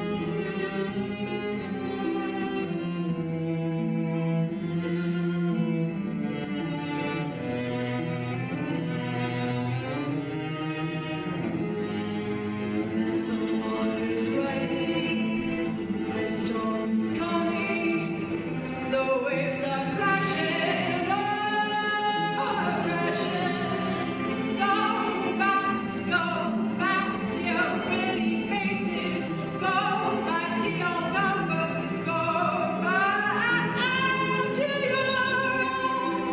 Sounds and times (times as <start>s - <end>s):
Cello: 0.0s - 36.3s
Classical music: 0.0s - 36.3s
Violin, fiddle: 0.0s - 36.3s.